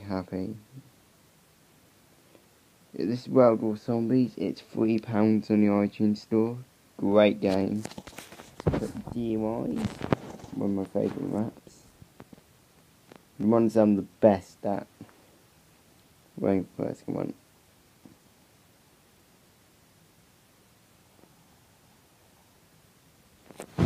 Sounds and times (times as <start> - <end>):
Speech: 0.0 - 0.8, 3.0 - 7.9, 8.8 - 11.9, 13.4 - 14.9, 16.4 - 17.4.